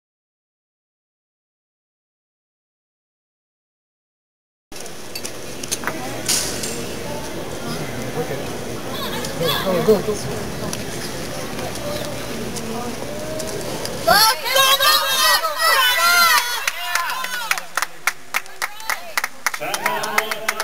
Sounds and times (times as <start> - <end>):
Speech: 18.4 - 20.6.